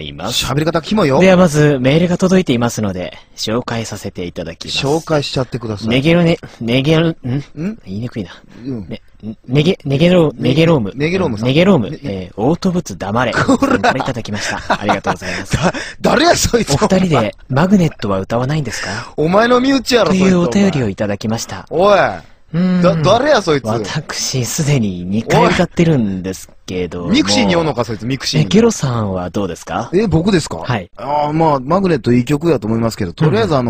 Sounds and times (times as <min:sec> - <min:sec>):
Speech: 0:00.0 - 0:33.7.